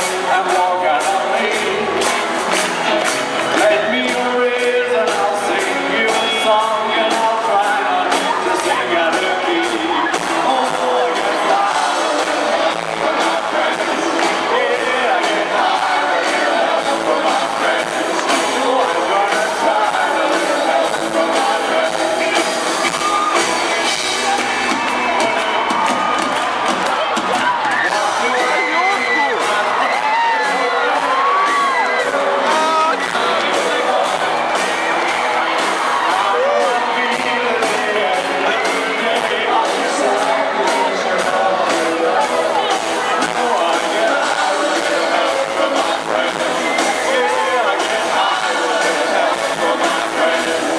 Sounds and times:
Pop music: 0.0 - 50.7.

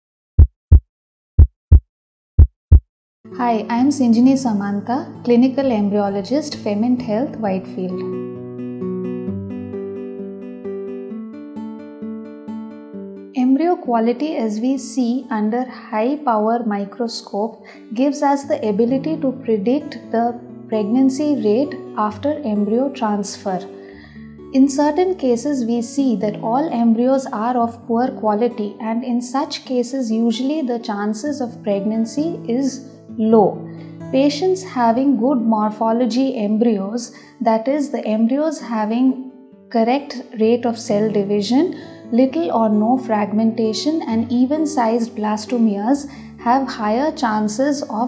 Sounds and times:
Music: 3.3 - 48.0
Speech: 3.4 - 8.0, 13.4 - 23.7, 24.6 - 33.6, 34.2 - 48.0.

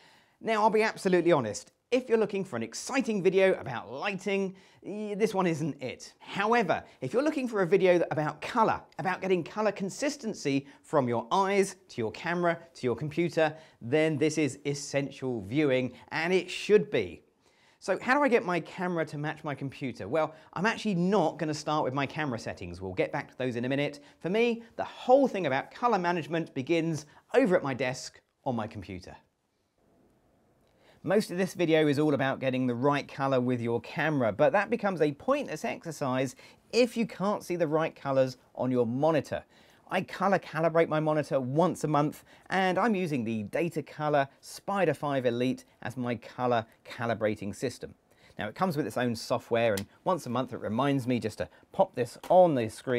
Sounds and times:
Speech: 0.4 - 29.3, 31.0 - 52.9.

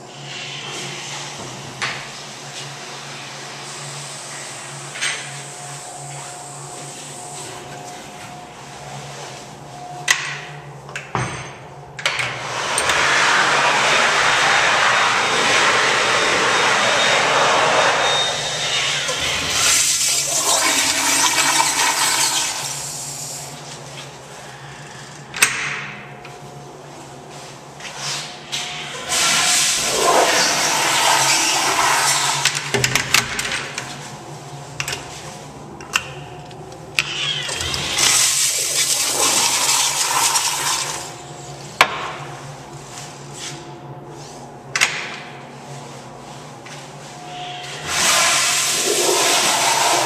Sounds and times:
Toilet flush: 12.4 - 23.5, 28.9 - 32.7, 37.4 - 41.2, 47.6 - 50.0.

